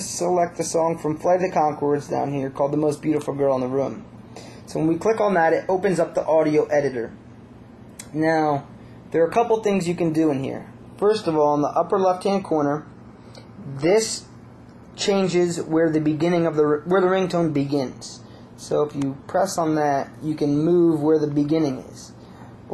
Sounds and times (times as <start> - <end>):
Speech: 0.0 - 4.1, 4.7 - 7.2, 8.0 - 12.9, 13.6 - 14.3, 15.0 - 22.7.